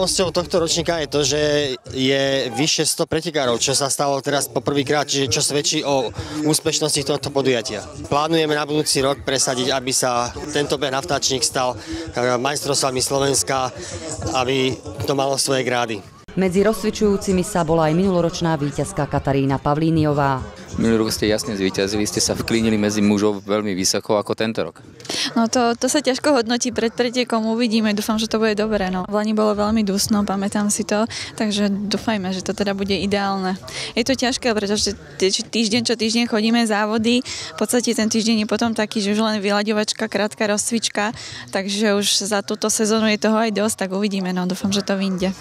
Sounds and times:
Outside, urban or manmade: 0:00.0 - 0:45.4.

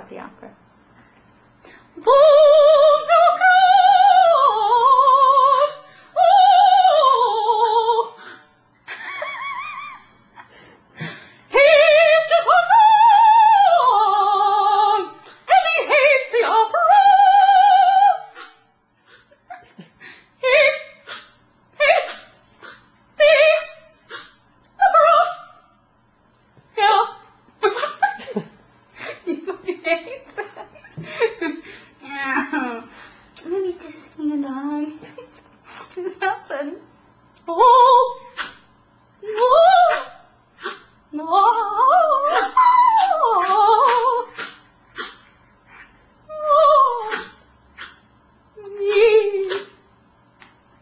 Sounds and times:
Opera: 0:02.0 - 0:08.2, 0:11.5 - 0:18.4, 0:41.2 - 0:44.3, 0:46.3 - 0:47.4.

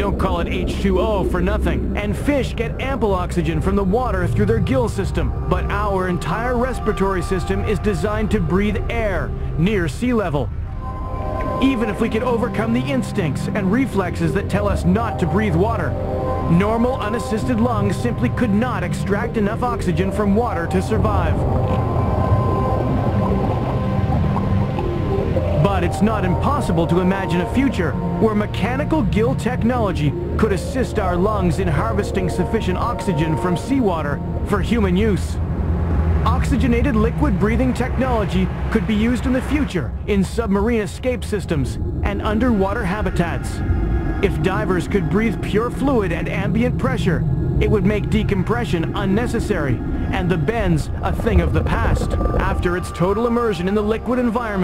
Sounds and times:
Speech: 0:00.0 - 0:10.5, 0:11.6 - 0:21.8, 0:25.6 - 0:35.4, 0:36.3 - 0:43.6, 0:44.2 - 0:54.6
Music: 0:00.0 - 0:54.6.

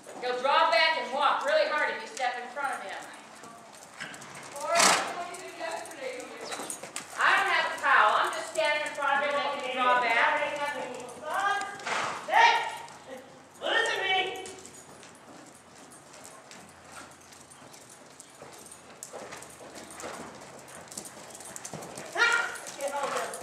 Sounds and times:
Clip-clop: 0:00.0 - 0:23.4
Speech: 0:07.2 - 0:11.7.

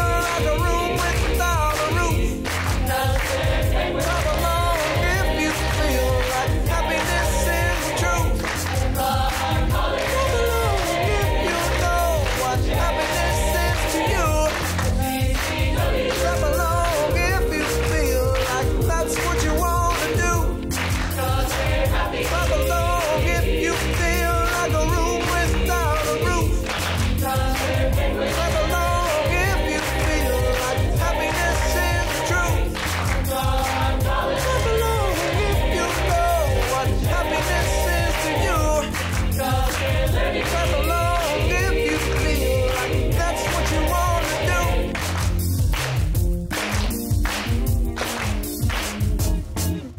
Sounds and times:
Gospel music: 0:00.0 - 0:49.9.

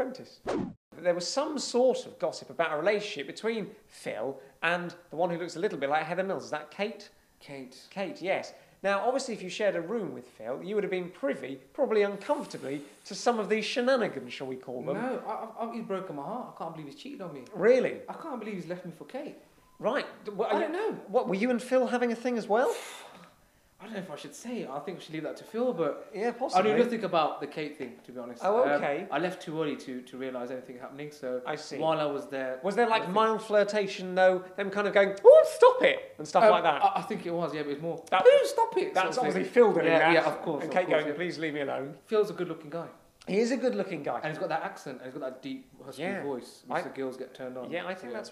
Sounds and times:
Speech: 0:00.0 - 0:00.4, 0:01.0 - 0:22.8, 0:23.8 - 0:48.3
Inside, small room: 0:00.0 - 0:48.3.

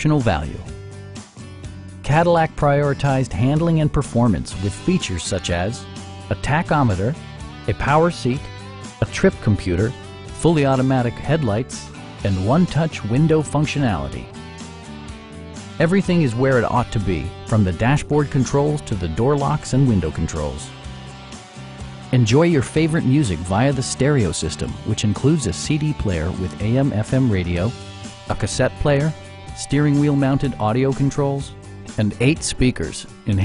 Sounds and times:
Speech: 0:00.0 - 0:00.7, 0:02.1 - 0:14.3, 0:15.8 - 0:20.7, 0:22.1 - 0:33.4
Music: 0:00.0 - 0:33.4.

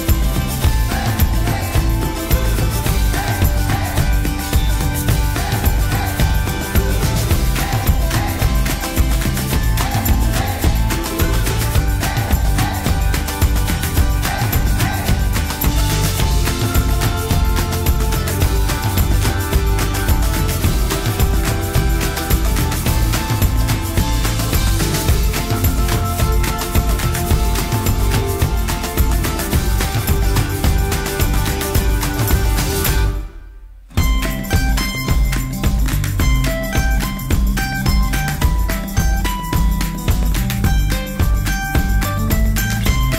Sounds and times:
Music: 0:00.0 - 0:43.1.

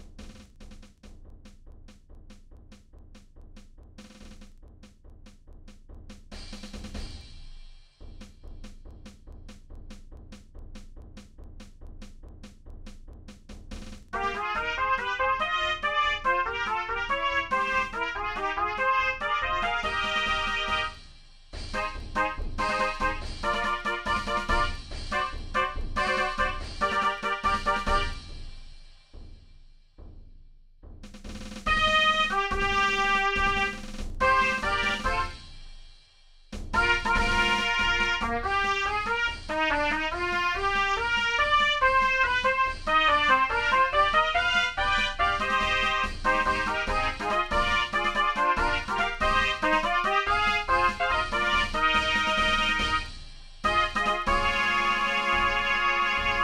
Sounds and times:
Trumpet: 0:14.1 - 0:28.6, 0:31.7 - 0:35.6, 0:36.7 - 0:56.4.

